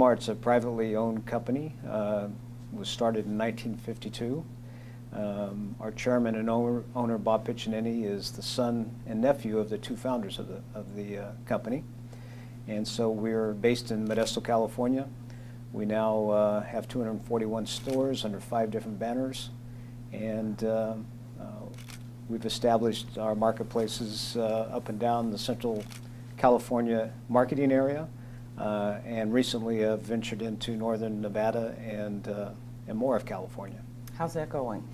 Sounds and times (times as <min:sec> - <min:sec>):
Speech: 0:00.0 - 0:04.5, 0:05.2 - 0:11.9, 0:12.7 - 0:15.1, 0:15.8 - 0:19.5, 0:20.2 - 0:34.9.